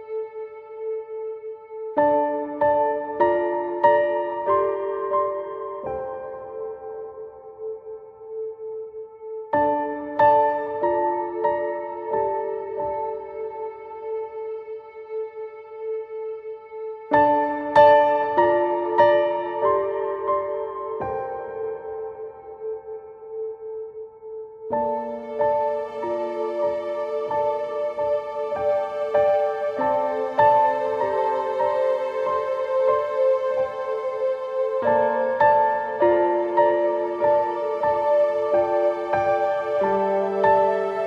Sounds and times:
New-age music: 0.0s - 41.0s.

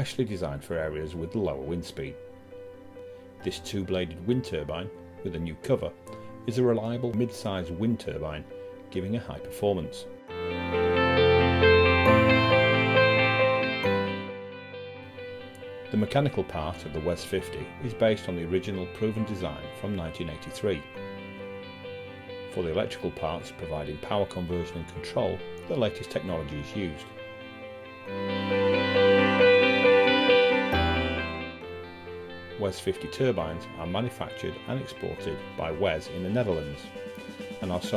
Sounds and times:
Speech: 0.0s - 2.2s, 3.4s - 10.1s, 15.9s - 20.9s, 22.5s - 27.1s, 32.6s - 36.9s, 37.6s - 37.9s
Music: 0.0s - 37.9s.

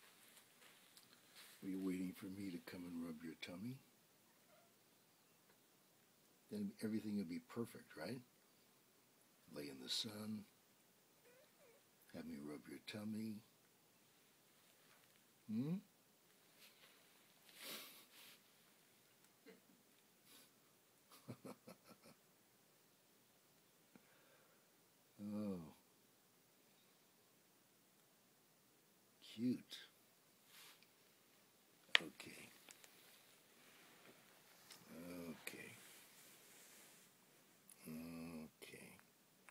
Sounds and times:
Speech: 1.6s - 3.9s, 6.5s - 8.3s, 9.5s - 10.5s, 12.1s - 13.5s, 15.5s - 15.9s, 25.2s - 25.8s, 29.2s - 30.0s, 31.9s - 32.6s, 34.8s - 35.9s, 37.8s - 39.1s.

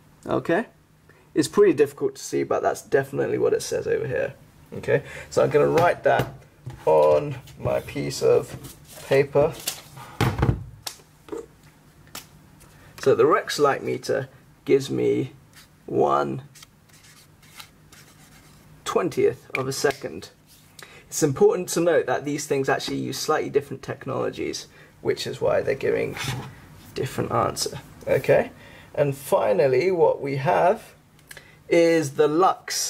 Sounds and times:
Inside, small room: 0.0s - 32.9s
Speech: 0.2s - 0.8s, 1.4s - 9.6s, 13.0s - 16.5s, 18.8s - 20.4s, 21.1s - 31.0s, 31.7s - 32.9s.

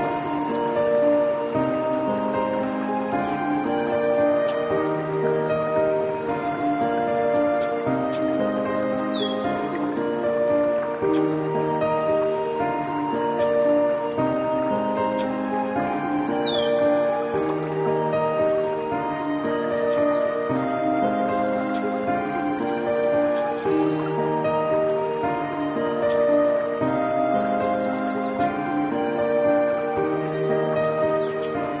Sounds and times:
New-age music: 0.0s - 31.8s.

